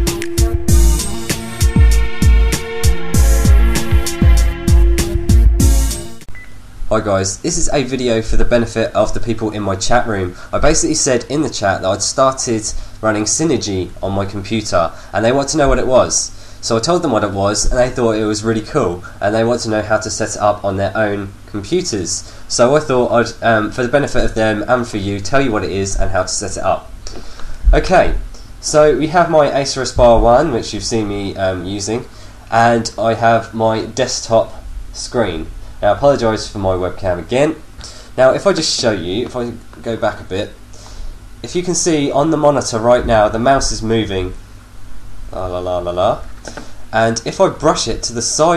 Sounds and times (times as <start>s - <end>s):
Speech: 6.9s - 26.9s, 27.7s - 37.6s, 38.2s - 40.6s, 41.4s - 44.4s, 45.3s - 46.3s, 46.9s - 48.5s.